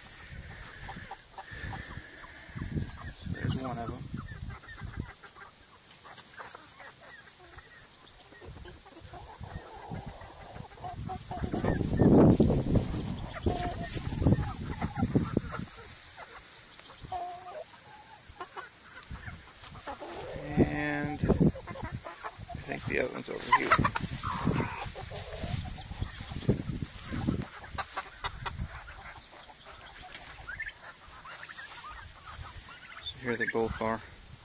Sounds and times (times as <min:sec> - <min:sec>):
Chicken, rooster: 0:00.1 - 0:34.0.